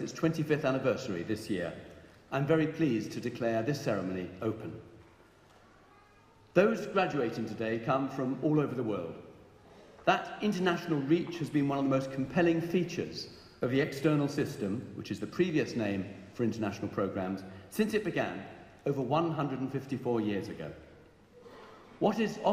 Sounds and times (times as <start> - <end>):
Male speech, man speaking: 0.0 - 4.8, 6.6 - 9.2, 10.1 - 20.8, 22.0 - 22.5.